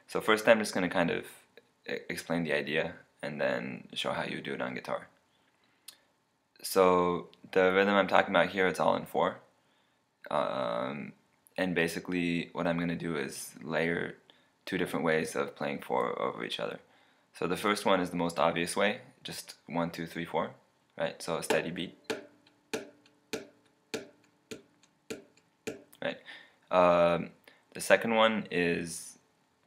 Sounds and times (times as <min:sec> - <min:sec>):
Speech: 0:00.0 - 0:05.2, 0:06.6 - 0:09.5, 0:10.3 - 0:22.0, 0:26.0 - 0:29.2.